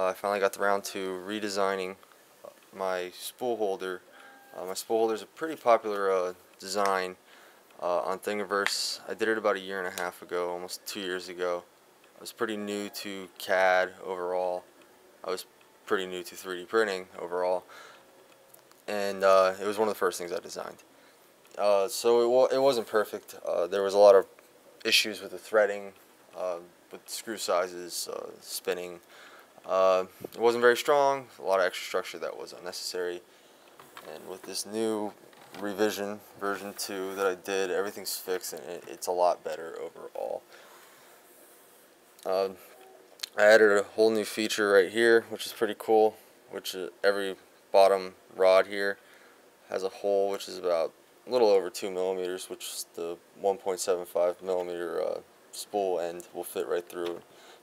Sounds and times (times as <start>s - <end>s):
Speech: 0.0s - 7.2s, 7.8s - 17.7s, 18.9s - 20.8s, 21.6s - 33.3s, 34.0s - 40.4s, 42.2s - 49.0s, 49.7s - 57.2s.